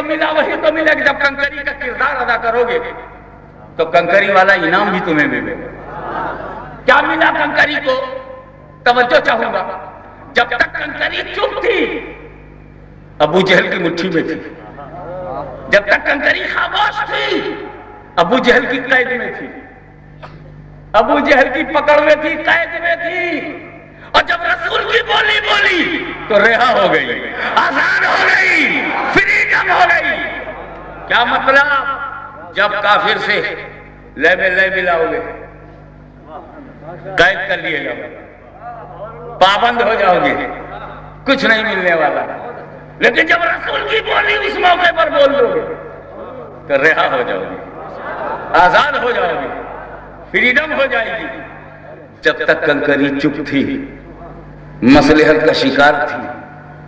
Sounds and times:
Male speech, man speaking: 0.0 - 3.1, 3.8 - 5.7, 6.9 - 12.2, 13.2 - 19.6, 21.0 - 30.5, 31.1 - 35.5, 36.3 - 47.6, 48.5 - 49.6, 50.3 - 56.4.

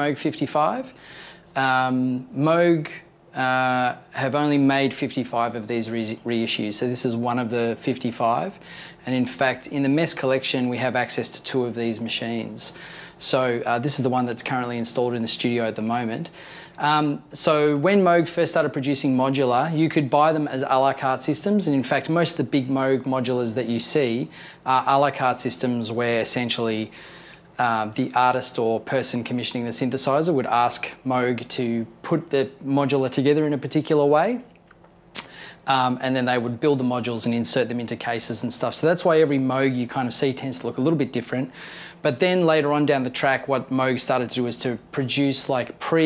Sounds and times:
Speech: 0.0 - 1.0, 1.6 - 27.0, 27.6 - 34.6, 35.6 - 46.0.

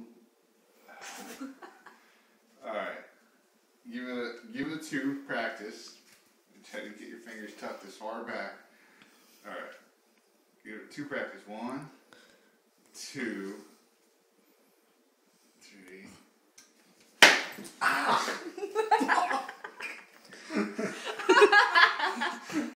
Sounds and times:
Speech: 6.6 - 8.6, 10.7 - 12.0, 13.0 - 13.7.

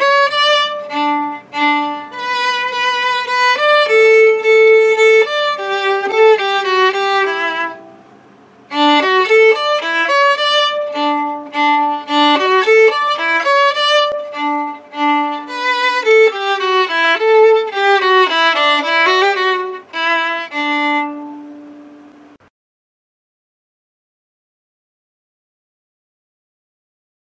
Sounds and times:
Violin, fiddle: 0.0 - 22.4.

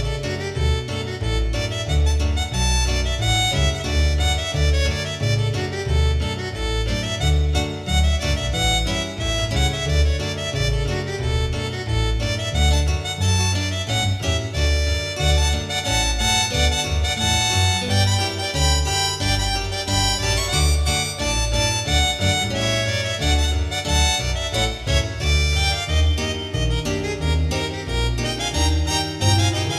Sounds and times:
Music: 0.0 - 29.7.

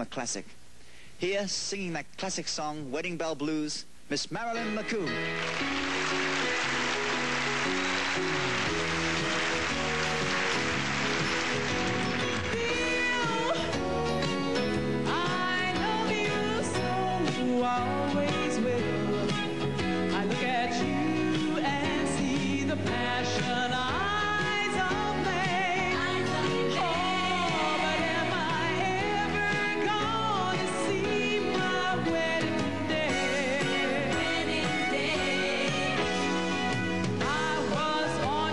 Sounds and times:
Music: 4.3 - 38.5.

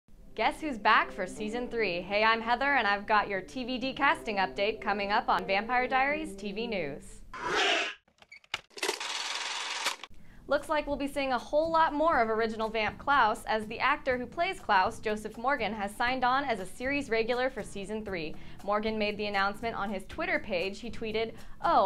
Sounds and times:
Music: 0.1 - 7.2, 10.1 - 21.8
Speech: 0.4 - 7.2, 10.5 - 21.8.

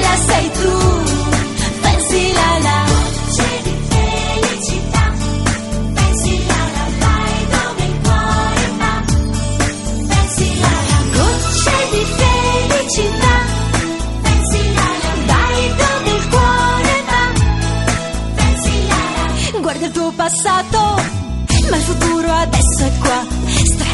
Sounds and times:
Theme music: 0.0 - 22.1.

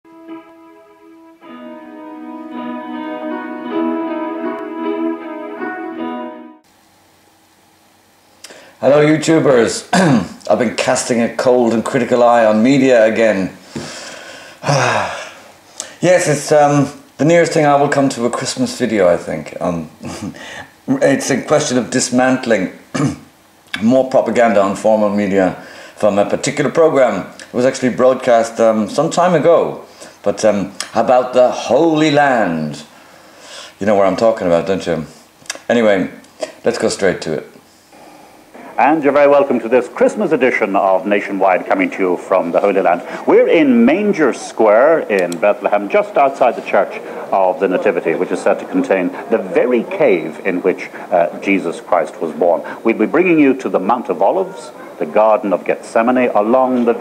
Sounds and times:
Classical music: 0.1 - 6.7
Speech: 8.8 - 13.6, 16.0 - 32.9, 33.8 - 37.6, 38.7 - 57.0.

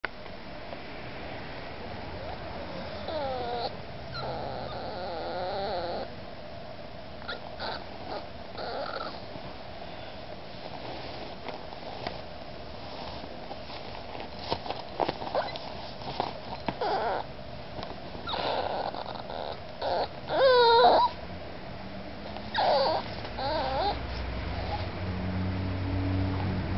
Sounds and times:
Dog: 2.2 - 6.1, 7.2 - 9.3, 15.2 - 15.8, 16.5 - 17.3, 18.2 - 21.2, 22.3 - 24.9.

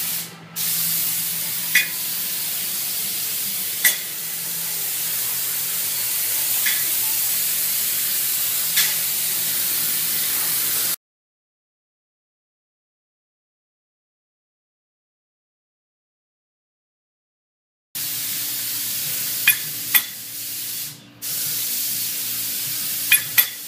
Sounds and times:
Spray: 0.0 - 11.0, 18.0 - 23.6.

